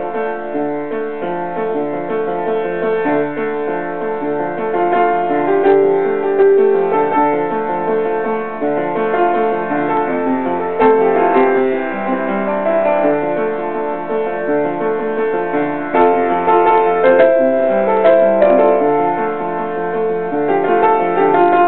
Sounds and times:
Music: 0:00.0 - 0:21.6.

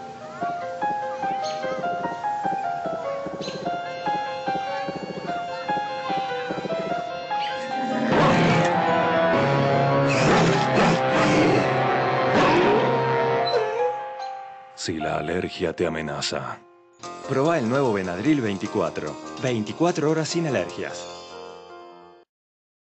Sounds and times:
Music: 0:00.0 - 0:22.3
Speech: 0:14.8 - 0:16.6, 0:17.3 - 0:21.1.

